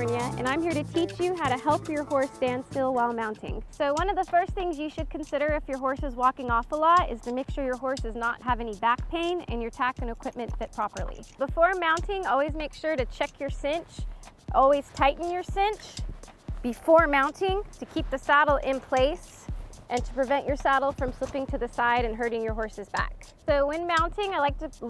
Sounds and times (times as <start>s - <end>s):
Speech: 0.0s - 16.0s, 16.6s - 24.8s
Music: 0.0s - 24.8s.